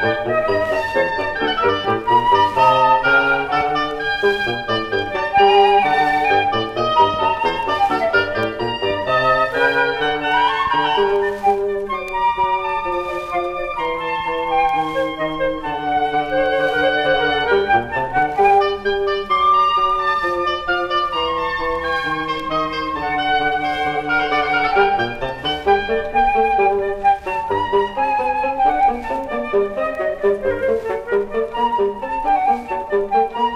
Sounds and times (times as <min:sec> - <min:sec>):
Flute: 0:00.0 - 0:33.5.